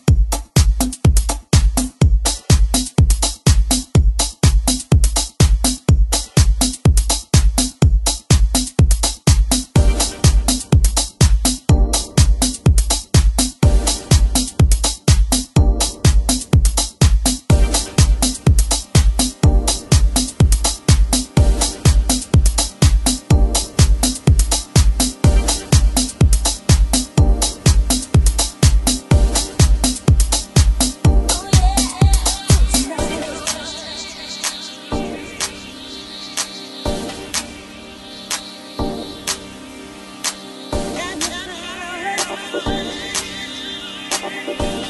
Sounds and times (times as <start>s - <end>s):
Music: 0.0s - 44.8s.